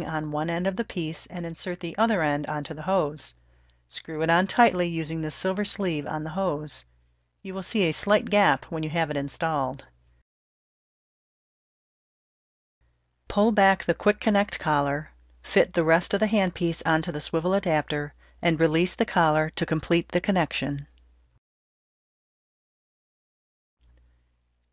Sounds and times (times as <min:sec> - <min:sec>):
Speech: 0:00.0 - 0:06.9, 0:07.5 - 0:09.9, 0:13.3 - 0:20.9.